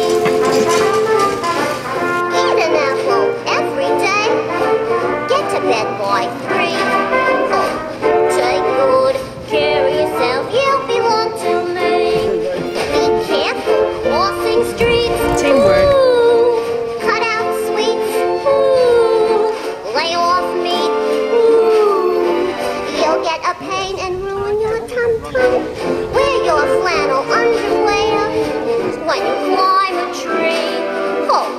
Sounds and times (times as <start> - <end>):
Music: 0.0 - 31.5
Speech: 14.8 - 16.0.